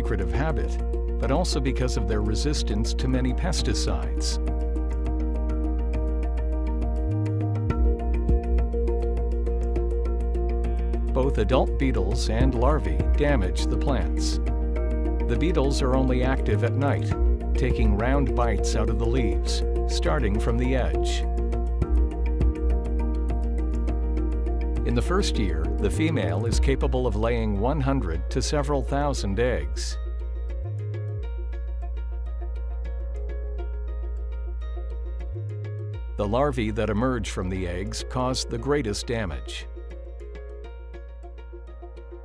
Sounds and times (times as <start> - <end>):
Speech: 0.0 - 4.4, 11.2 - 14.4, 15.3 - 21.3, 24.8 - 30.0, 36.2 - 39.7
Music: 0.0 - 42.2.